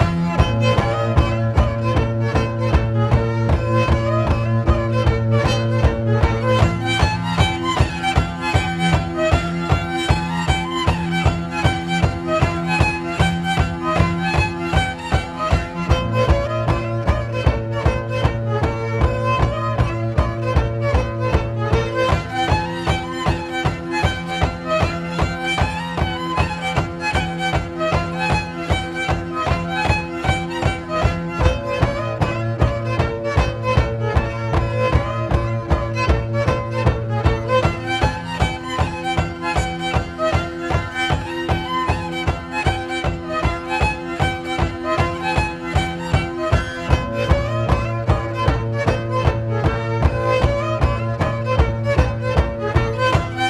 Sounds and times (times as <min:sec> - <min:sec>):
Violin, fiddle: 0:00.0 - 0:53.5.